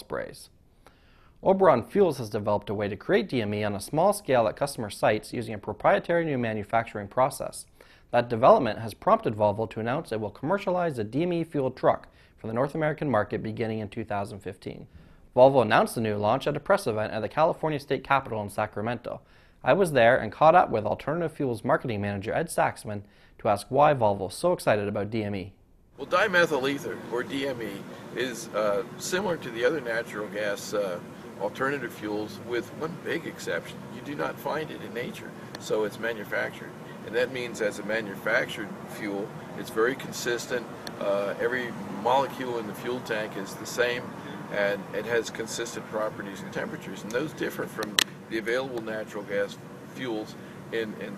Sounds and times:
Speech: 0.0 - 0.5, 1.4 - 51.1.

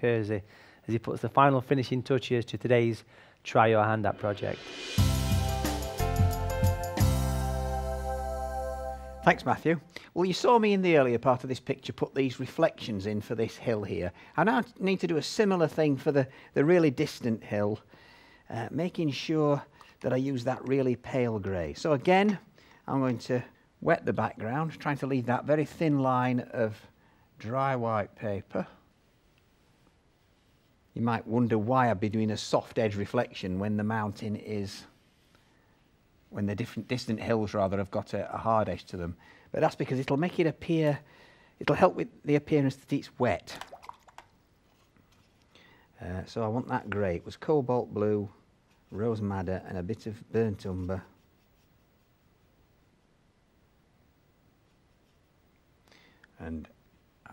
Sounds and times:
Speech: 0.0 - 4.6, 9.2 - 17.8, 18.5 - 28.8, 31.0 - 34.9, 36.3 - 43.6, 46.0 - 51.2, 56.4 - 57.3.

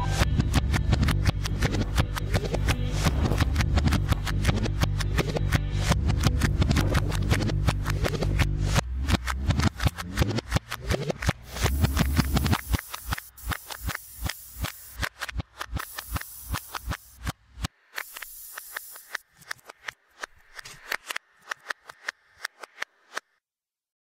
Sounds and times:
Spray: 10.8 - 17.3, 17.9 - 19.9.

